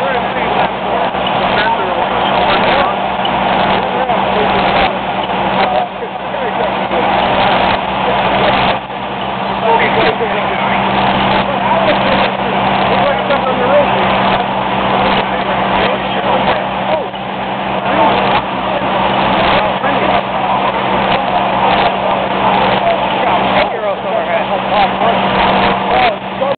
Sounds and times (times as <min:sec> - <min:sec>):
Speech: 0:00.0 - 0:26.5.